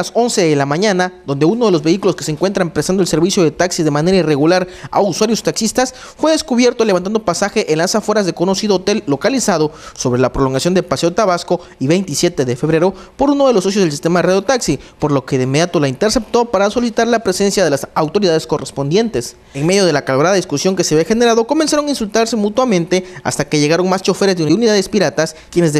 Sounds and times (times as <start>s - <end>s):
Speech: 0.0s - 25.8s.